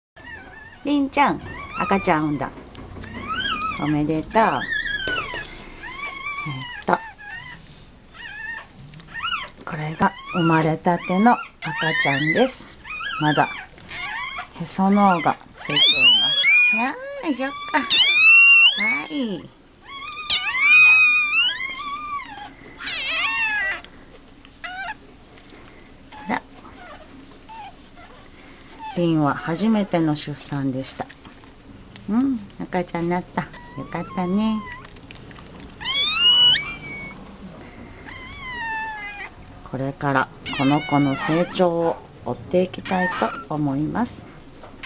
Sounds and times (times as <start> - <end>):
Dog: 0.2 - 23.9, 24.6 - 25.0, 26.1 - 29.8, 33.4 - 37.2, 38.0 - 39.4, 40.5 - 41.8, 42.8 - 43.5
Speech: 0.8 - 2.5, 3.8 - 4.7, 9.7 - 13.5, 14.6 - 17.9, 18.8 - 19.5, 29.0 - 31.1, 32.1 - 34.7, 39.7 - 44.3.